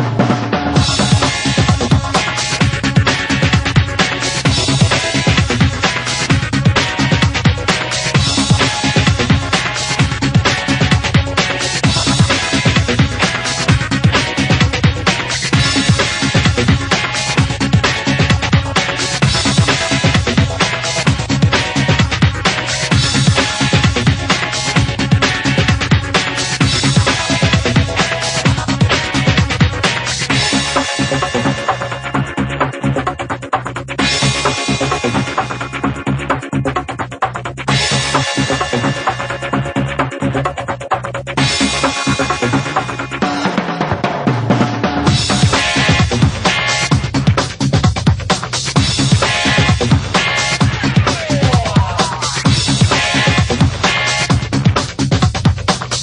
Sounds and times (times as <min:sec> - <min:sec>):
Music: 0:00.0 - 0:56.0.